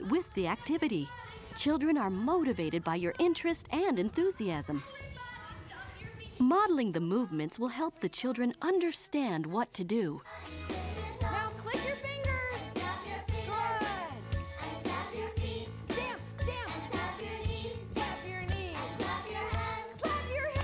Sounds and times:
Speech: 0:00.0 - 0:10.2, 0:13.5 - 0:14.2.

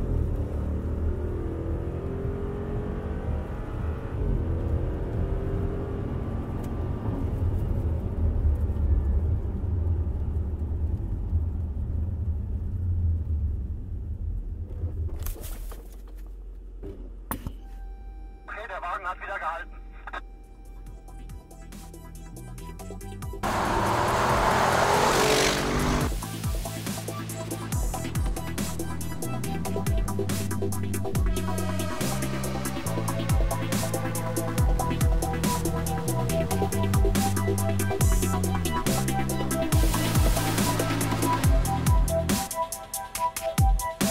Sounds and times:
Car: 0:00.0 - 0:43.2.

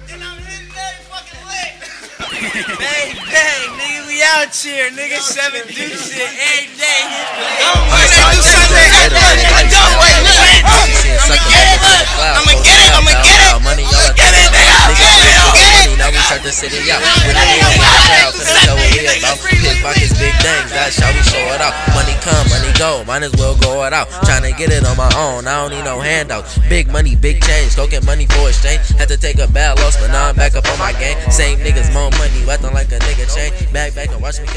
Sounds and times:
Rapping: 0:00.0 - 0:01.9, 0:02.7 - 0:34.5
Music: 0:00.0 - 0:03.7, 0:07.7 - 0:34.5.

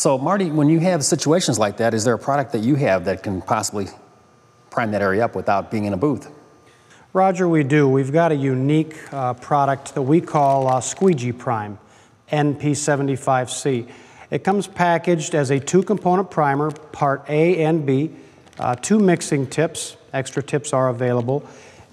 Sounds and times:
Speech: 0:00.0 - 0:04.1, 0:04.7 - 0:06.4, 0:07.1 - 0:21.5.

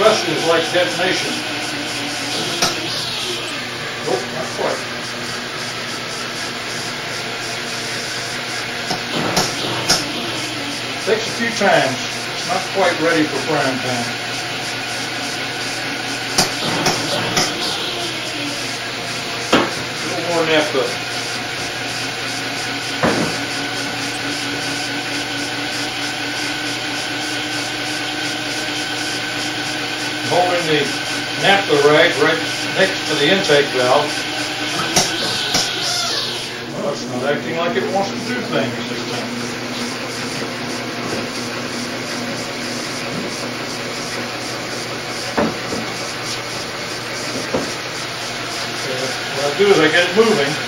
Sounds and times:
Engine: 0:00.0 - 0:50.6.

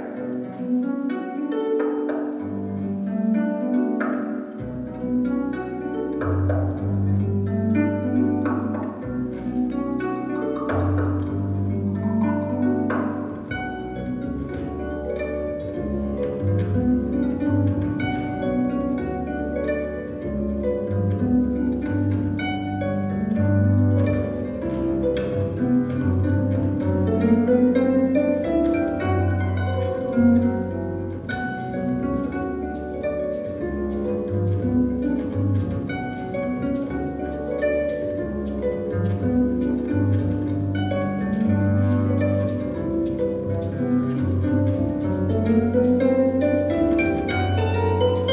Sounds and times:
Folk music: 0:00.0 - 0:48.3.

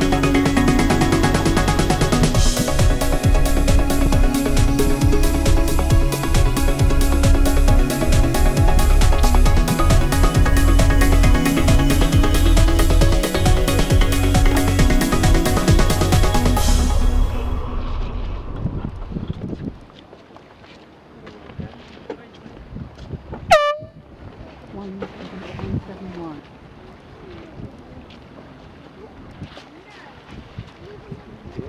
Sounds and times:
Outside, urban or manmade: 0:00.0 - 0:31.6
Speech: 0:21.2 - 0:22.6, 0:24.7 - 0:26.4, 0:28.9 - 0:31.6.

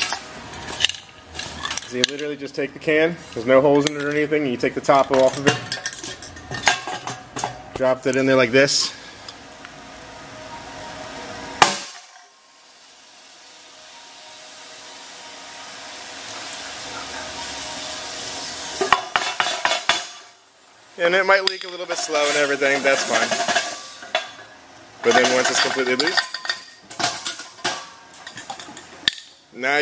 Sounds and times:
Speech: 0:01.9 - 0:05.6, 0:07.8 - 0:09.0, 0:21.0 - 0:23.4, 0:25.0 - 0:26.2, 0:29.6 - 0:29.8.

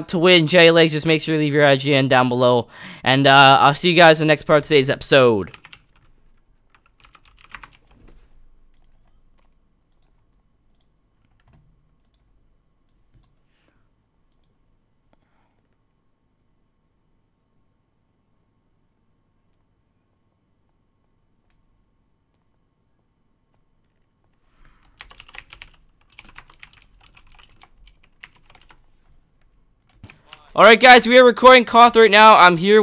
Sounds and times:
Computer keyboard: 0:05.5 - 0:12.3, 0:24.8 - 0:28.8, 0:29.4 - 0:30.6.

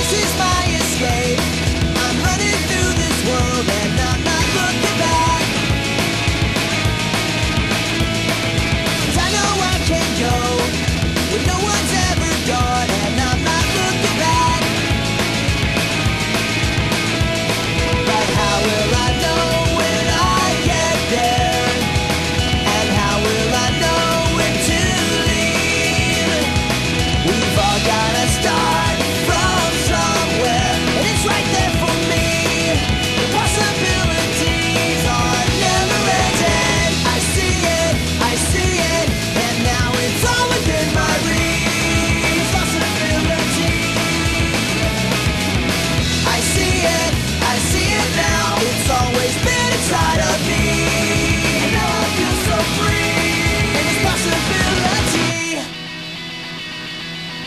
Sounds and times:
Music: 0:00.0 - 0:57.4.

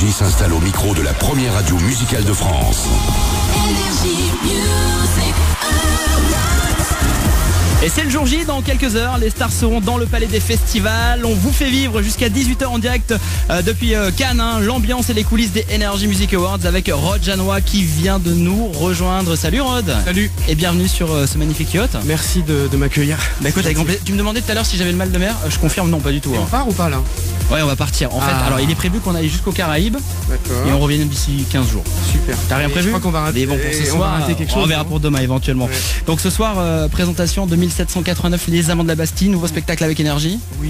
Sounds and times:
Speech: 0:00.0 - 0:02.9, 0:07.8 - 0:40.6
Background music: 0:00.0 - 0:40.6.

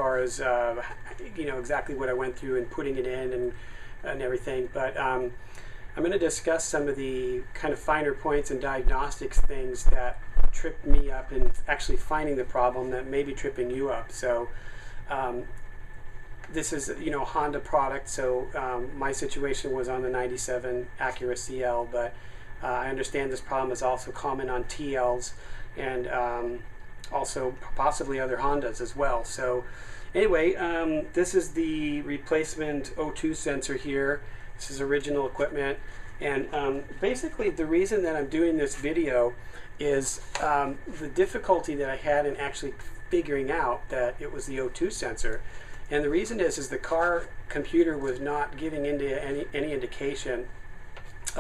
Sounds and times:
Speech: 0:00.0 - 0:05.4, 0:06.0 - 0:15.6, 0:16.5 - 0:50.5.

